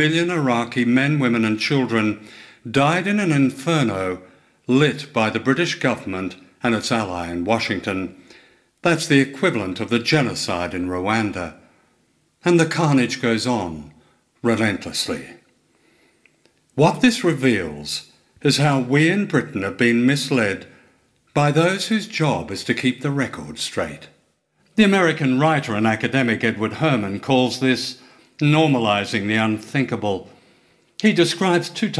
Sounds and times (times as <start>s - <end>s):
Speech: 0.0s - 8.2s, 8.8s - 11.6s, 12.4s - 15.5s, 16.8s - 24.2s, 24.8s - 30.4s, 31.0s - 31.9s.